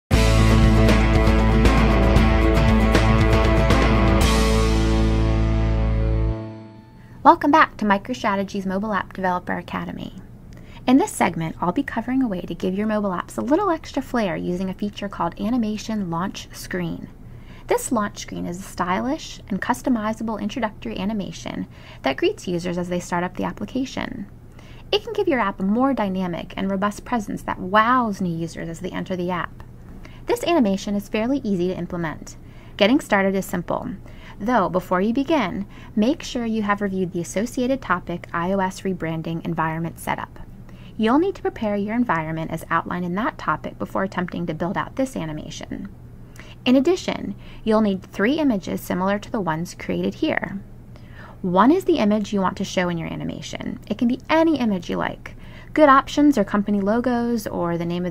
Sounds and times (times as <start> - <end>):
Speech: 7.3 - 10.2, 10.8 - 17.1, 17.7 - 24.3, 24.9 - 29.6, 30.3 - 45.9, 46.6 - 50.6, 51.4 - 58.1.